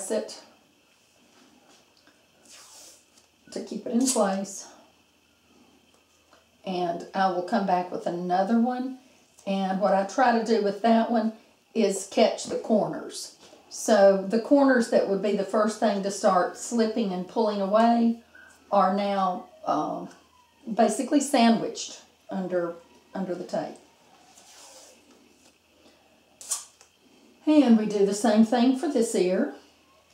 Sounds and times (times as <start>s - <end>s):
Speech: 0.0s - 0.5s, 3.5s - 4.8s, 6.7s - 20.1s, 20.7s - 23.8s, 27.4s - 29.6s
Inside, small room: 0.0s - 30.1s.